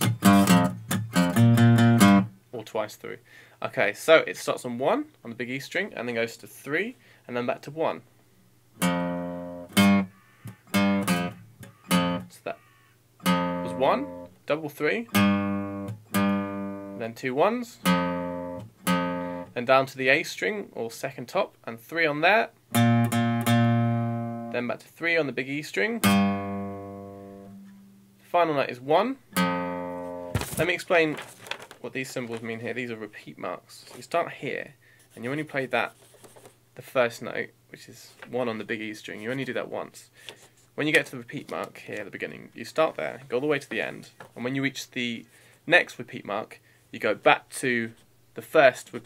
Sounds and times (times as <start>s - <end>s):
Acoustic guitar: 0.0s - 2.4s, 8.8s - 14.4s, 15.1s - 17.1s, 17.8s - 19.6s, 22.7s - 24.6s, 26.0s - 28.3s, 29.2s - 31.8s.